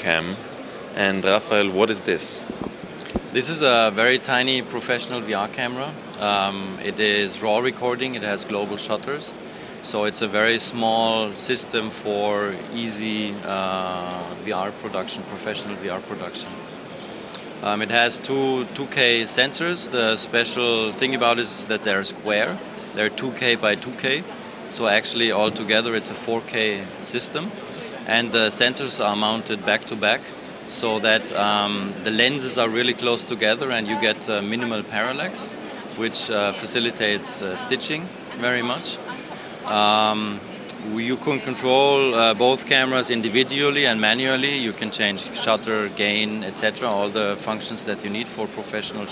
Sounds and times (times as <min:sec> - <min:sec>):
Speech: 0:00.0 - 0:02.4, 0:03.3 - 0:16.6, 0:17.6 - 0:49.1.